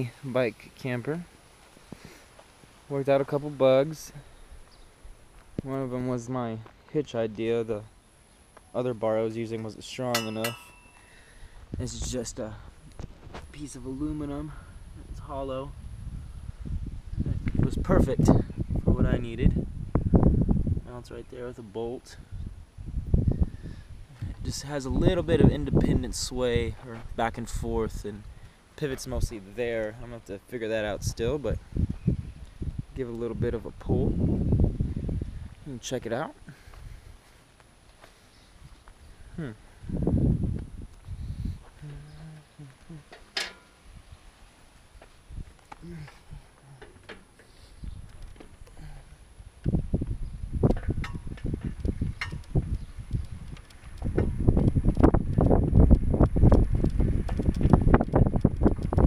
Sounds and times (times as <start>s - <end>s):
Speech: 0.0s - 1.3s, 2.9s - 4.3s, 5.6s - 7.9s, 8.7s - 10.7s, 11.8s - 12.7s, 13.4s - 15.8s, 17.3s - 19.6s, 20.8s - 22.2s, 24.2s - 28.2s, 28.8s - 31.6s, 33.0s - 34.1s, 35.6s - 36.4s, 41.8s - 43.1s.